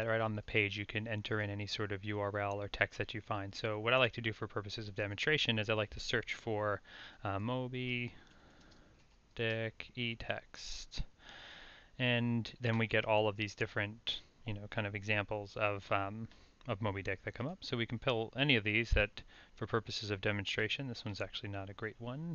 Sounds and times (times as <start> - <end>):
Speech: 0.0 - 8.2, 9.4 - 11.1, 12.0 - 22.3.